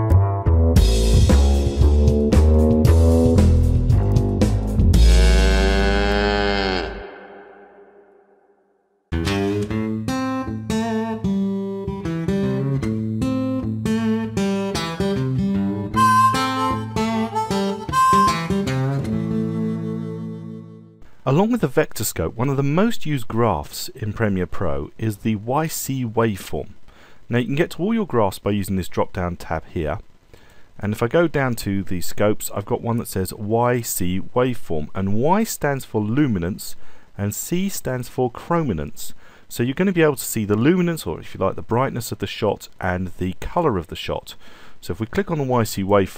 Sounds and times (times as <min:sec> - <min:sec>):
Music: 0:00.0 - 0:05.8, 0:09.1 - 0:21.0.